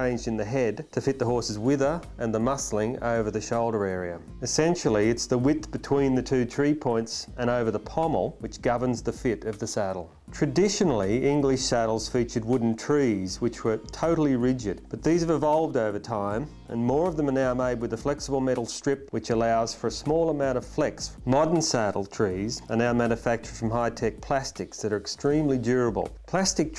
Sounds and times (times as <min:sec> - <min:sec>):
Speech: 0:00.0 - 0:26.7.